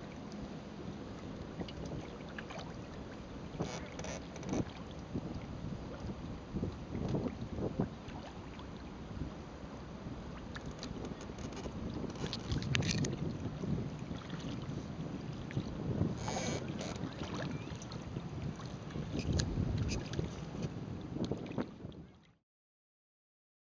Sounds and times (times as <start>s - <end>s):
Boat, Water vehicle: 0.0s - 22.4s.